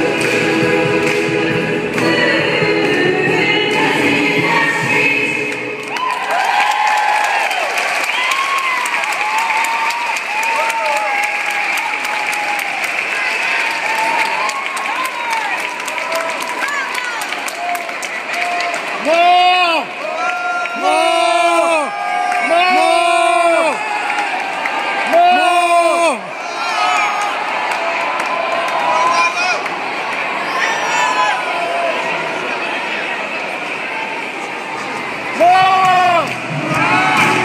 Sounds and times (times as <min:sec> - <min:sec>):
Crowd: 0:00.0 - 0:37.4
Cheering: 0:05.8 - 0:37.4.